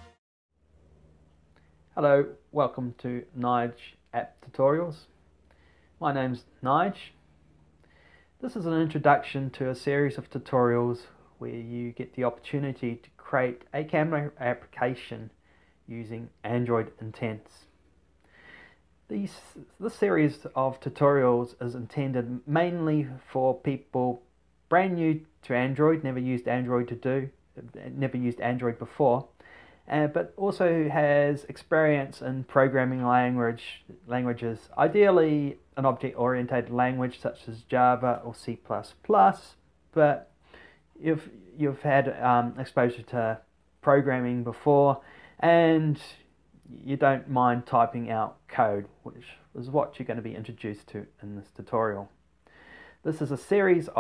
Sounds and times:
Speech: 2.0 - 5.2, 6.0 - 7.2, 8.4 - 17.8, 19.1 - 40.4, 41.0 - 52.2, 53.0 - 54.0.

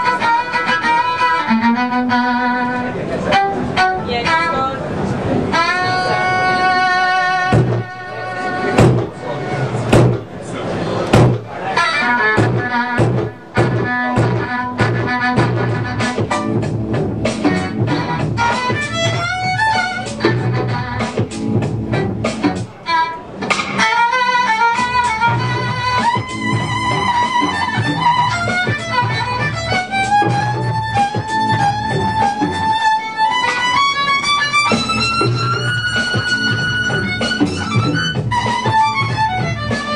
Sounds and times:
Musical instrument: 11.1 - 39.9.

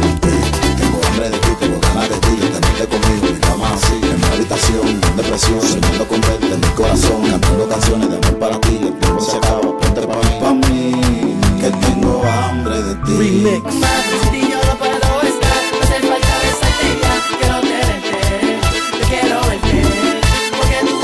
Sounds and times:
Afrobeat: 0.0 - 21.0.

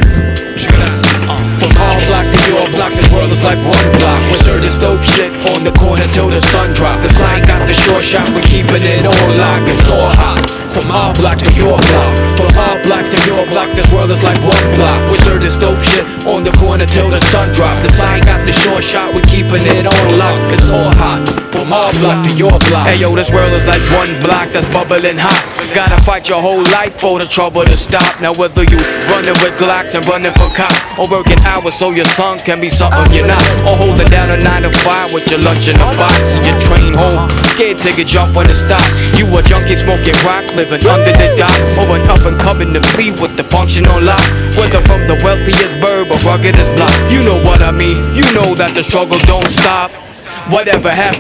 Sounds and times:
Music: 0.0 - 51.2
Skateboard: 0.1 - 6.6, 7.2 - 15.2, 18.6 - 22.8, 23.7 - 32.5, 33.3 - 40.4, 48.2 - 51.2.

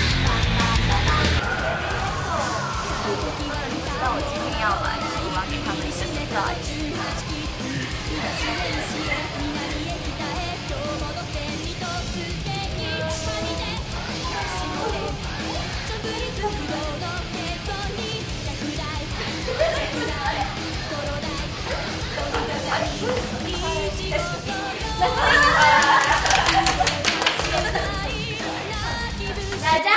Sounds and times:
Music: 0.0 - 29.9.

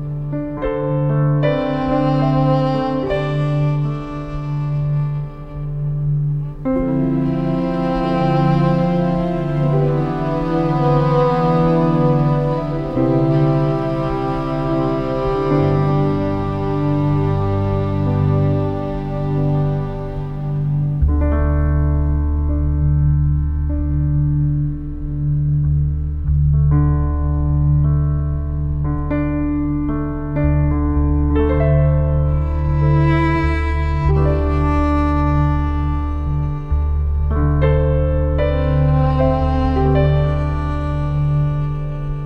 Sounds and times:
Tender music: 0.0 - 42.2.

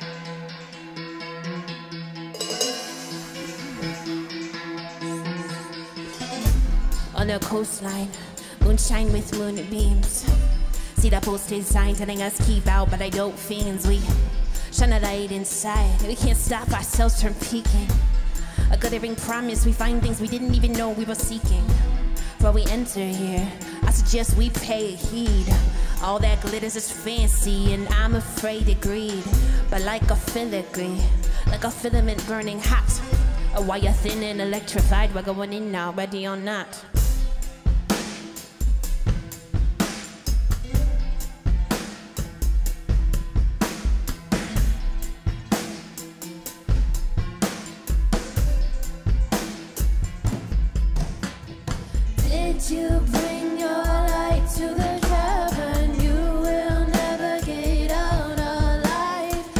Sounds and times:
Music: 0.0 - 59.5.

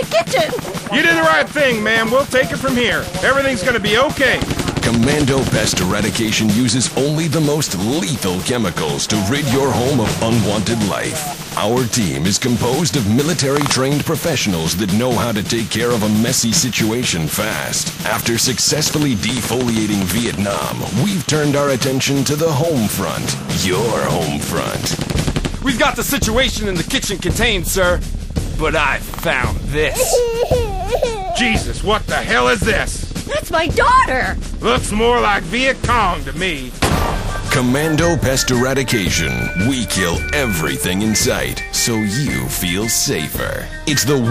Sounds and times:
Speech: 0.0 - 25.0, 25.6 - 30.3, 31.3 - 36.8, 37.5 - 44.3.

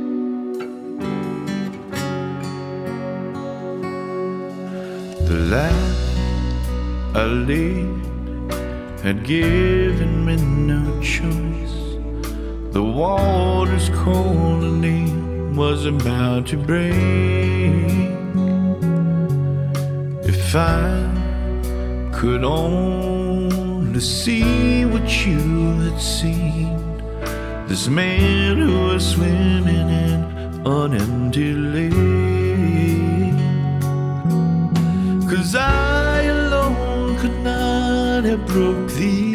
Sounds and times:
Music: 0.0 - 39.3.

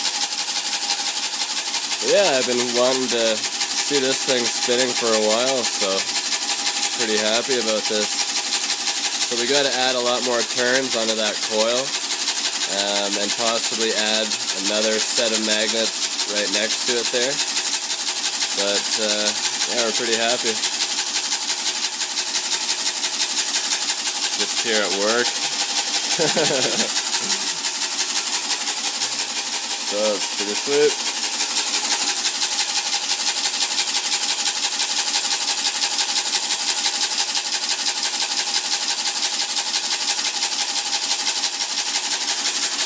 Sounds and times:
Engine: 0.0 - 42.8
Speech: 2.0 - 6.1, 7.0 - 8.1, 9.3 - 12.0, 12.7 - 17.4, 18.6 - 20.6, 24.4 - 25.4, 29.9 - 31.0.

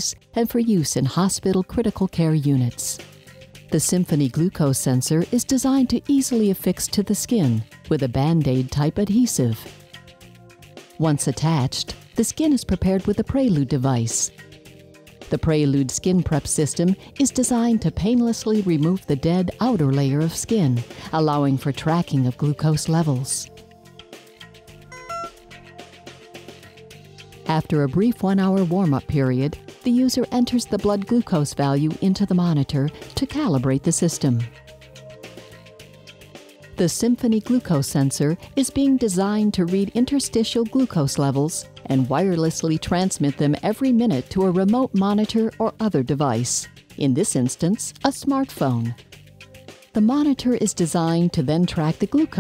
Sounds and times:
Speech: 0.0 - 3.0, 3.8 - 9.7, 11.0 - 14.3, 15.3 - 23.5, 27.5 - 34.5, 36.8 - 49.0, 50.0 - 52.4
Music: 0.0 - 52.4.

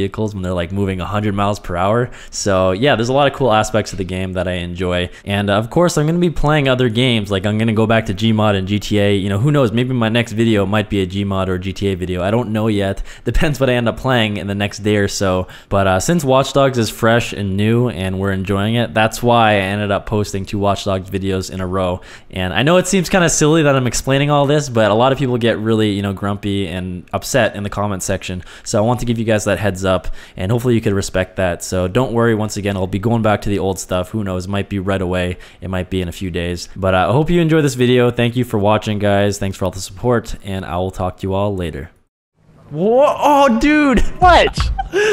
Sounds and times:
Speech: 0.0 - 42.0, 42.7 - 44.8.

